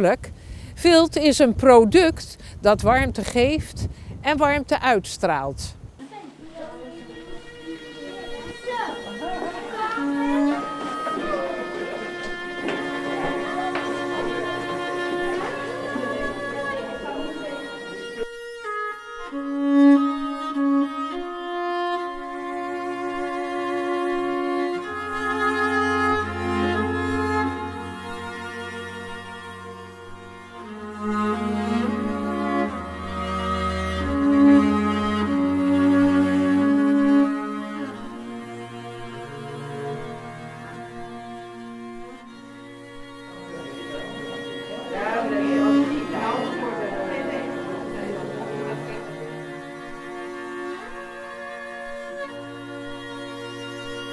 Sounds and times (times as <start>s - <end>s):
Speech: 0.0s - 12.1s, 43.5s - 49.5s
Music: 5.6s - 54.1s.